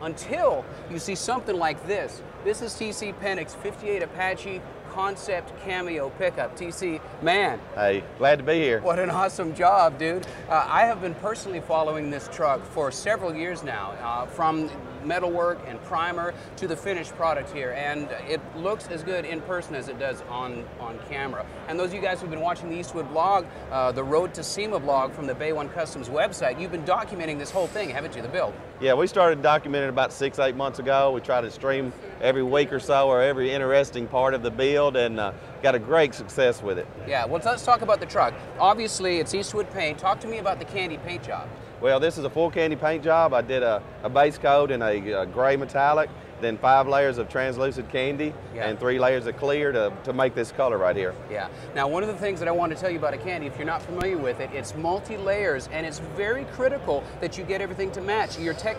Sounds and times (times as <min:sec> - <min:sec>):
Speech: 0:00.0 - 0:58.7.